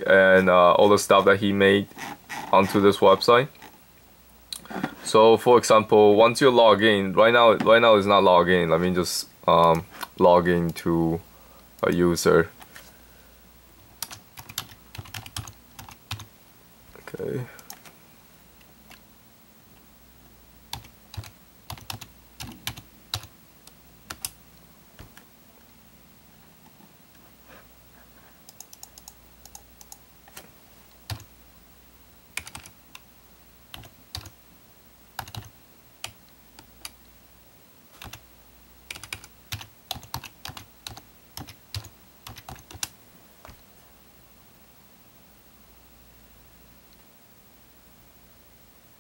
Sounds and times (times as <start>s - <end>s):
Computer keyboard: 14.0s - 16.3s, 20.8s - 23.3s, 24.1s - 24.4s, 28.5s - 30.0s, 32.4s - 32.7s, 33.7s - 34.3s, 35.2s - 37.0s, 38.0s - 38.2s, 38.9s - 42.9s.